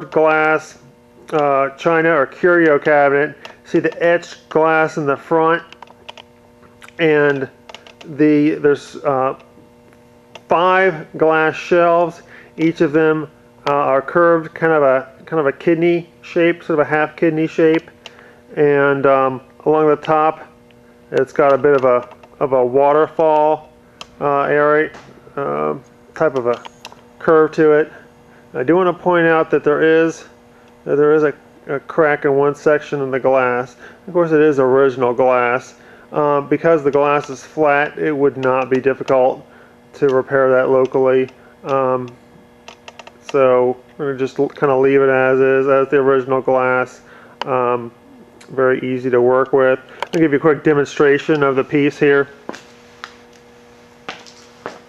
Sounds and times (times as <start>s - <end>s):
Speech: 0.0s - 5.7s, 6.8s - 9.4s, 10.5s - 17.9s, 18.5s - 28.0s, 28.6s - 42.2s, 43.2s - 52.4s.